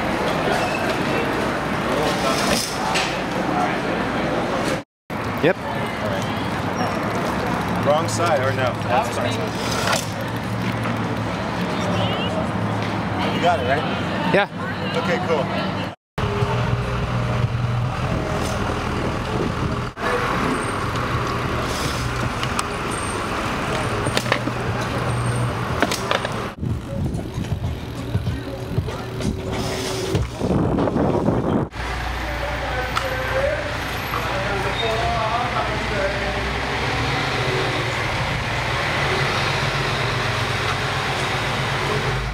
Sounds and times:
Bicycle: 0:05.2 - 0:12.4, 0:18.1 - 0:35.4
Music: 0:26.7 - 0:30.3.

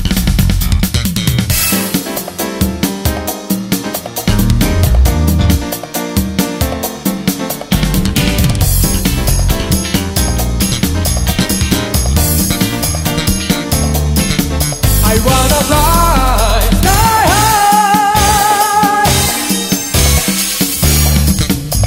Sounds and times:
Music: 0:00.0 - 0:21.8.

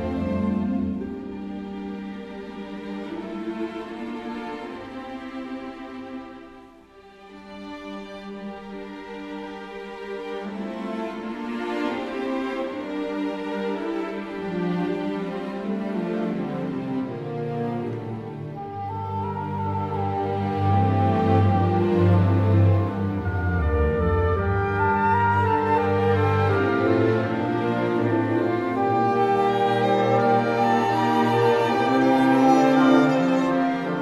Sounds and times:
Music: 0:00.0 - 0:34.0.

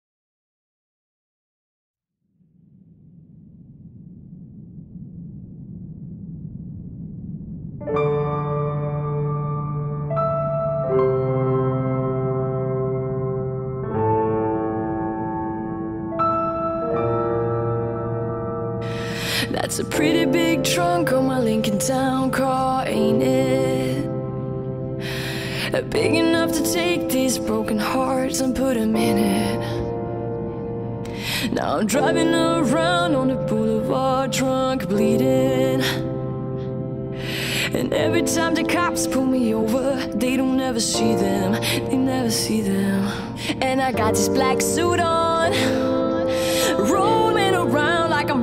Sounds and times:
Music: 0:07.8 - 0:48.4.

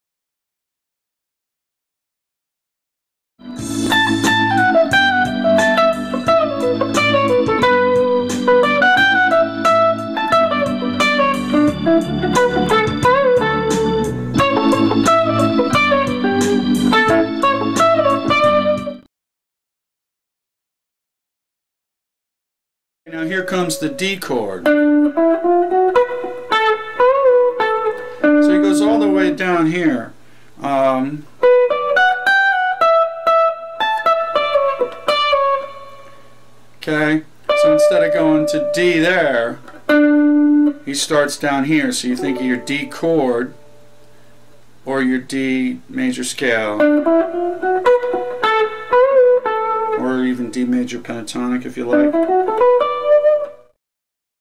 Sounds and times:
Electric guitar: 0:03.4 - 0:19.0, 0:24.6 - 0:29.7, 0:31.2 - 0:36.4, 0:37.4 - 0:44.3, 0:46.6 - 0:53.7
Speech: 0:23.1 - 0:24.7, 0:28.4 - 0:31.3, 0:36.8 - 0:39.6, 0:40.9 - 0:43.6, 0:44.8 - 0:46.9, 0:50.0 - 0:52.1.

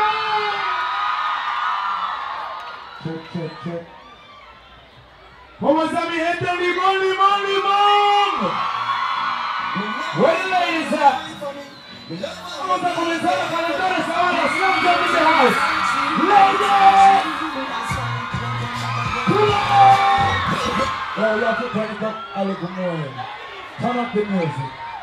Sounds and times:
Speech: 0:05.6 - 0:08.5, 0:09.8 - 0:15.6, 0:21.2 - 0:24.7
Music: 0:08.6 - 0:21.1.

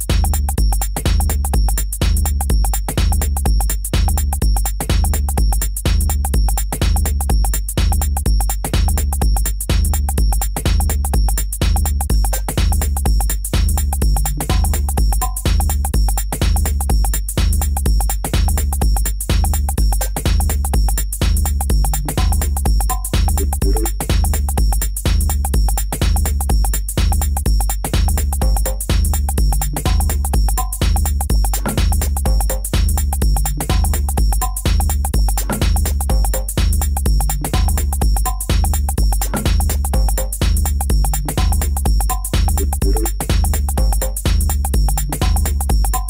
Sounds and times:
House music: 0:00.0 - 0:46.1.

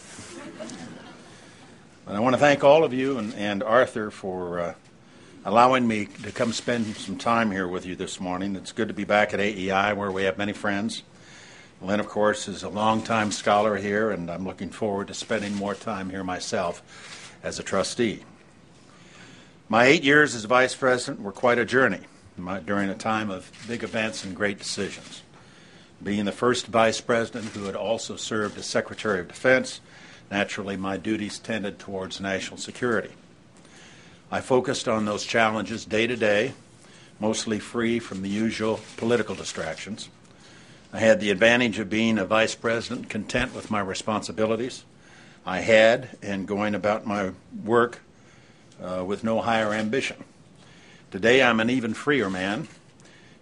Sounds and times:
Narration, monologue: 0:00.0 - 0:53.4
Male speech, man speaking: 0:02.1 - 0:04.8, 0:05.4 - 0:11.1, 0:11.8 - 0:16.8, 0:17.4 - 0:18.3, 0:19.7 - 0:25.3, 0:26.0 - 0:33.2, 0:34.3 - 0:36.6, 0:37.2 - 0:40.1, 0:41.0 - 0:44.9, 0:45.5 - 0:48.0, 0:48.8 - 0:50.2, 0:51.1 - 0:52.7.

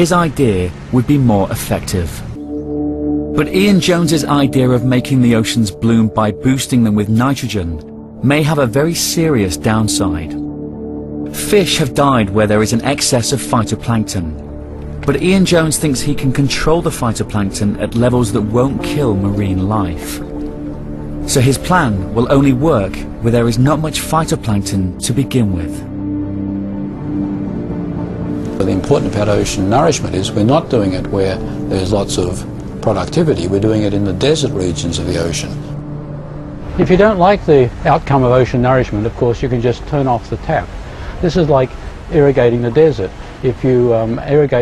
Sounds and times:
Speech: 0:00.0 - 0:02.2, 0:03.4 - 0:10.4, 0:11.4 - 0:14.4, 0:15.0 - 0:20.2, 0:21.3 - 0:25.8, 0:28.6 - 0:35.6, 0:36.8 - 0:44.6
Ocean: 0:00.0 - 0:07.6, 0:11.1 - 0:44.6
Music: 0:00.0 - 0:44.6.

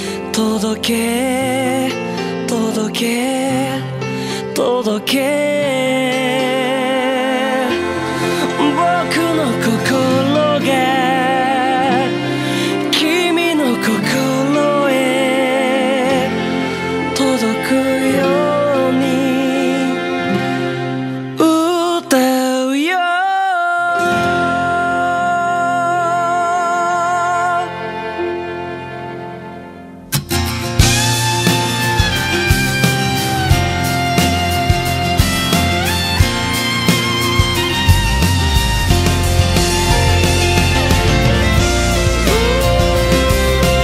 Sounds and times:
Music: 0:00.0 - 0:43.8.

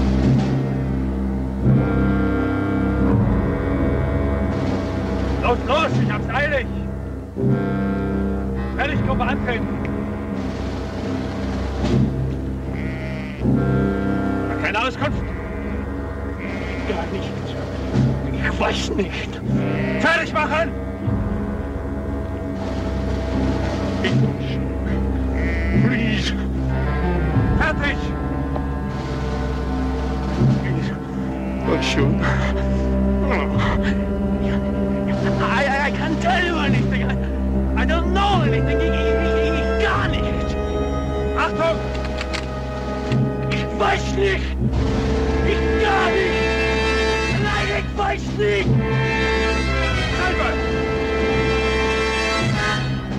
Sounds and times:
Music: 0:00.0 - 0:53.1
Speech: 0:08.8 - 0:09.7, 0:20.0 - 0:20.7, 0:27.6 - 0:28.1, 0:35.1 - 0:37.2, 0:37.8 - 0:40.5, 0:41.4 - 0:41.8, 0:43.5 - 0:44.6, 0:47.3 - 0:48.7, 0:50.1 - 0:50.6.

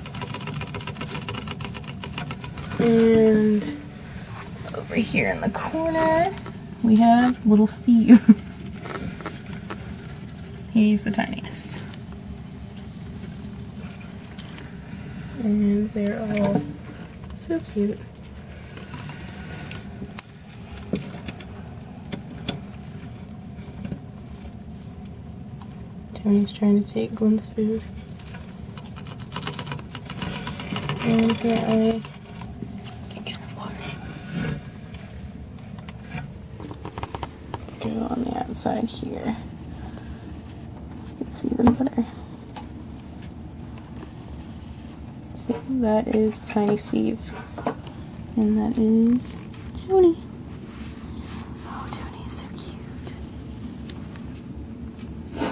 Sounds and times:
Speech: 0:02.8 - 0:03.8, 0:04.7 - 0:08.3, 0:15.4 - 0:16.8, 0:31.0 - 0:32.1, 0:37.7 - 0:39.5, 0:41.2 - 0:42.2, 0:45.4 - 0:47.3, 0:48.4 - 0:50.2.

